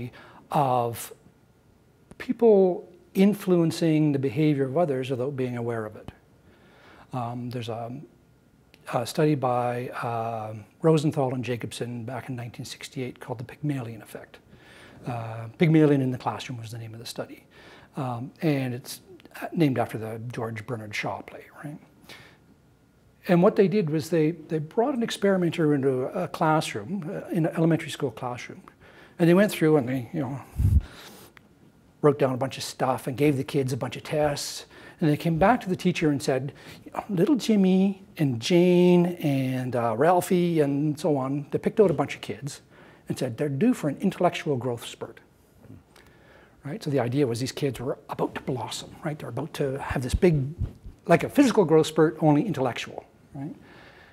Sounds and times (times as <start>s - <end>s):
Speech: 0.0s - 1.2s, 2.2s - 6.2s, 7.1s - 8.1s, 8.8s - 14.4s, 15.0s - 21.9s, 23.2s - 30.6s, 32.0s - 45.8s, 46.6s - 53.6s.